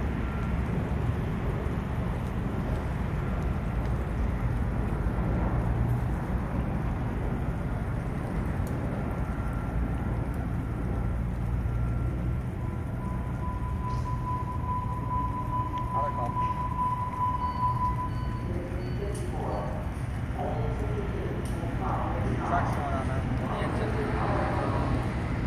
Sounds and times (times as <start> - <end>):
Vehicle: 0.0 - 25.4
Speech: 18.5 - 25.0.